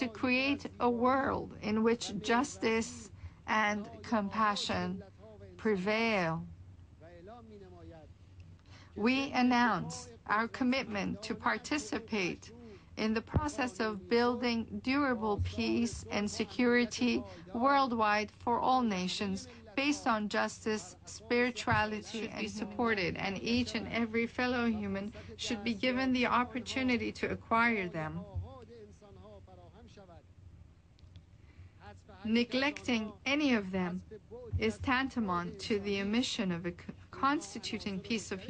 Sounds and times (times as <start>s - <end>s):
Female speech, woman speaking: 0.0s - 6.5s, 8.9s - 28.4s, 32.2s - 38.5s
Male speech, man speaking: 0.0s - 8.2s, 9.0s - 30.3s, 31.8s - 38.5s
Narration, monologue: 0.0s - 38.5s.